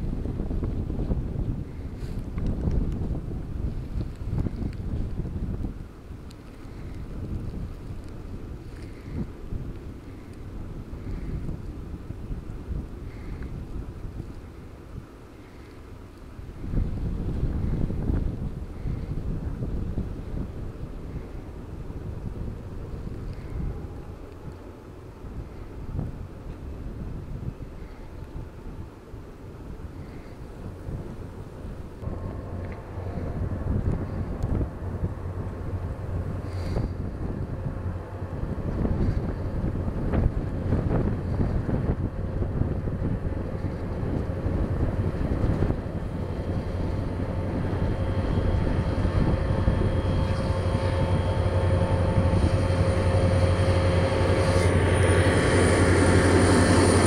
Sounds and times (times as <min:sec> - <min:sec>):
Wind noise (microphone): 0:00.0 - 0:15.7, 0:16.3 - 0:57.0.